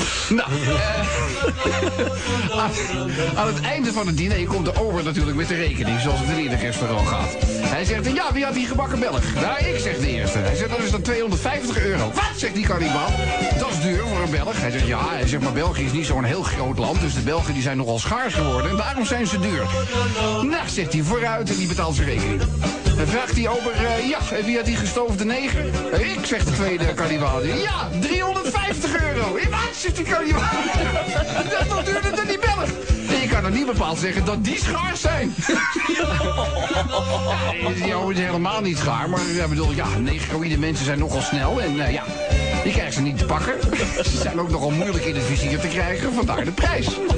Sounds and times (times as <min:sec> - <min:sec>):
Music: 0:00.0 - 0:47.1
Speech: 0:03.4 - 0:19.7, 0:20.4 - 0:22.3, 0:23.0 - 0:30.8, 0:31.6 - 0:35.4, 0:37.6 - 0:47.1.